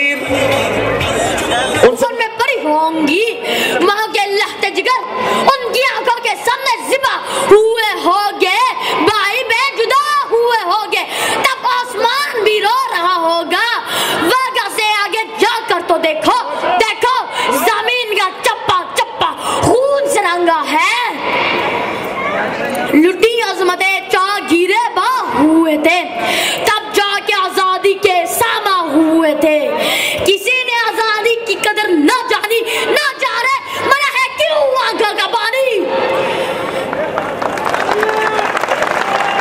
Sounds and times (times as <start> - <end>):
Narration, monologue: 1.8 - 21.2, 22.8 - 35.9
Child speech, kid speaking: 1.8 - 21.3, 22.2 - 36.1.